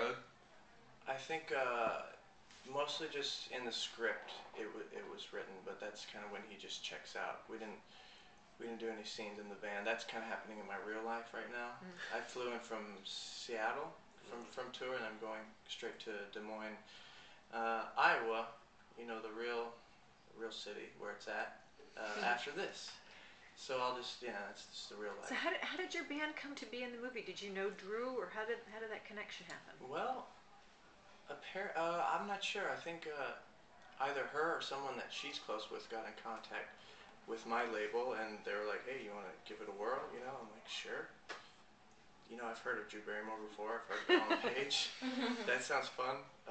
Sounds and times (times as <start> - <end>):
Speech: 1.1 - 7.8, 8.6 - 16.8, 17.5 - 19.8, 20.4 - 23.0, 34.0 - 36.7, 37.3 - 41.1, 42.3 - 46.5.